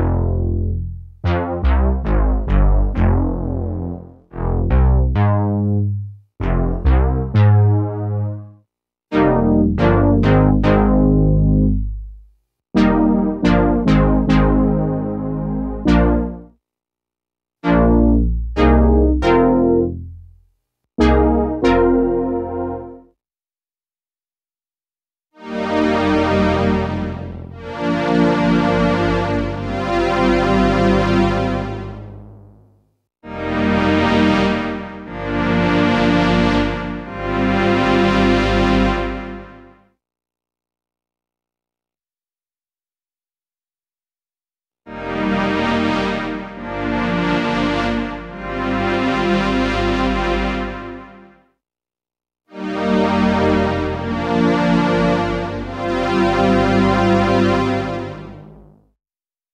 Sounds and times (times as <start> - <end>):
Synthesizer: 0.0 - 12.2, 12.8 - 16.6, 17.6 - 20.4, 21.0 - 23.2, 25.4 - 32.4, 33.3 - 39.8, 44.9 - 51.3, 52.6 - 58.8.